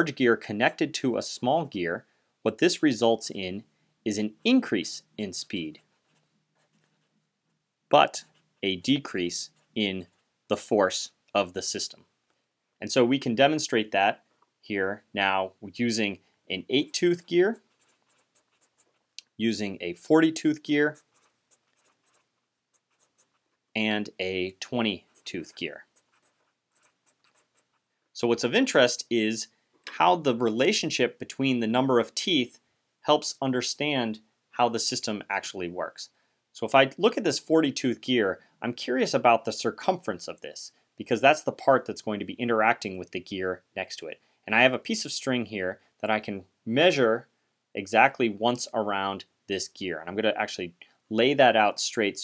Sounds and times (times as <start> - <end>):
Speech: 0.0 - 5.8, 7.9 - 12.0, 12.8 - 17.6, 19.2 - 21.0, 23.8 - 25.9, 28.2 - 52.2
Writing: 5.4 - 10.6, 16.7 - 19.3, 20.6 - 23.8, 24.6 - 27.9.